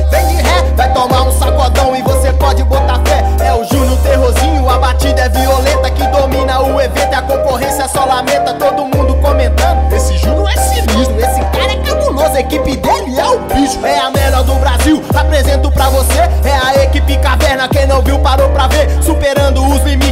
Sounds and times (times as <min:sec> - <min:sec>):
Music: 0:00.0 - 0:20.1.